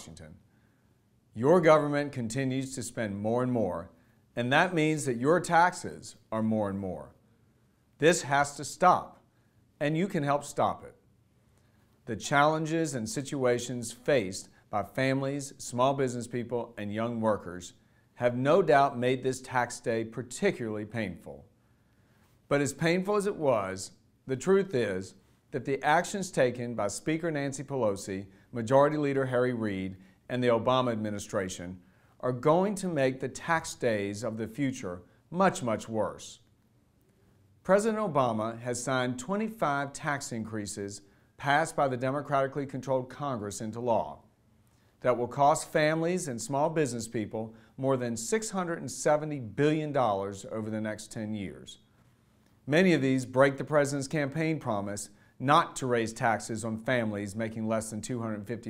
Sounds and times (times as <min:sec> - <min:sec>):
Speech: 0:00.0 - 0:00.5, 0:01.3 - 0:07.2, 0:08.0 - 0:11.1, 0:12.0 - 0:21.6, 0:22.5 - 0:36.5, 0:37.6 - 0:44.3, 0:45.0 - 0:51.9, 0:52.6 - 0:58.7.